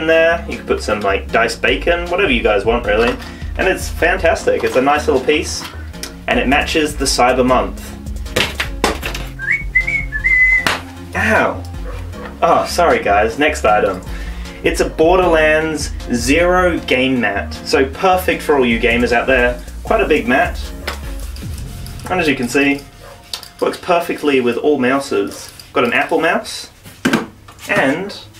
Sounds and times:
Speech: 0.0 - 5.7, 6.3 - 7.8, 11.2 - 11.6, 12.4 - 14.0, 14.6 - 20.7, 22.1 - 22.8, 23.6 - 26.7, 27.6 - 28.3
Music: 0.0 - 28.3
Whistling: 9.4 - 10.8.

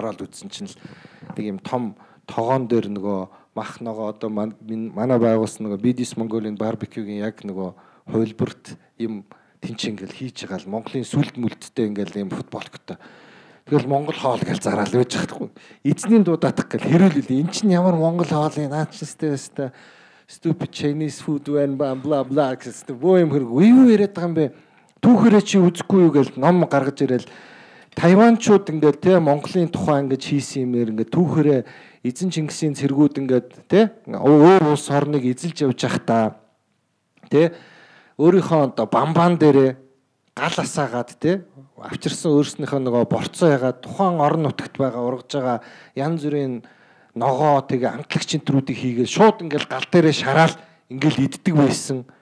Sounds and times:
Speech: 0.0 - 0.8, 1.4 - 13.0, 13.7 - 27.3, 28.0 - 36.5, 37.3 - 37.6, 38.2 - 39.8, 40.4 - 46.6, 47.2 - 52.1.

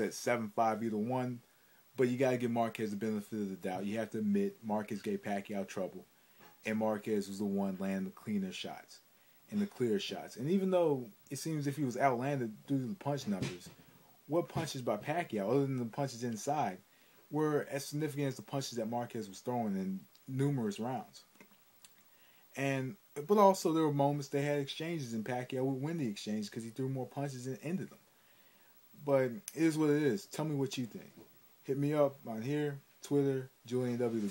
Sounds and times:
Speech: 0.0 - 1.4, 2.0 - 21.3, 22.6 - 28.0, 29.0 - 34.3
Inside, small room: 0.0 - 34.3.

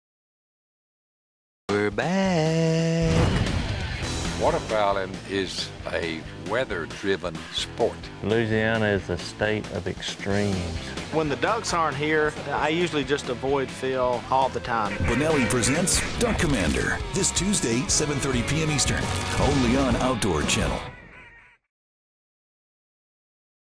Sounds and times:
Music: 1.7 - 21.0
Speech: 4.4 - 20.9.

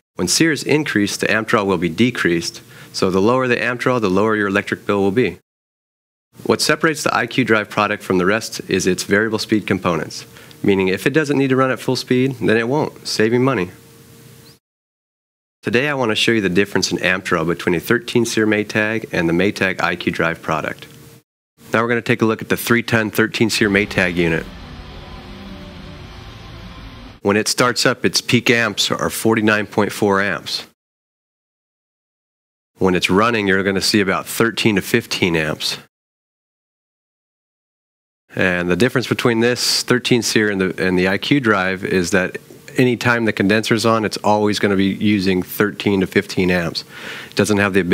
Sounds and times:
Speech: 0.2 - 5.4, 6.4 - 13.8, 15.6 - 20.9, 21.7 - 24.6, 27.2 - 30.8, 32.8 - 35.9, 38.3 - 47.9.

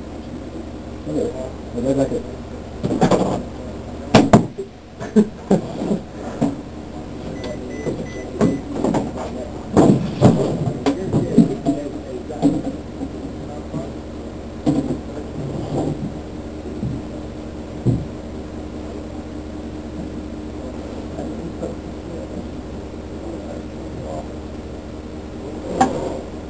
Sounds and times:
Speech: 1.0 - 5.8, 6.8 - 14.0, 14.9 - 15.8, 16.9 - 17.4, 18.8 - 19.4, 20.5 - 24.4, 25.4 - 26.4.

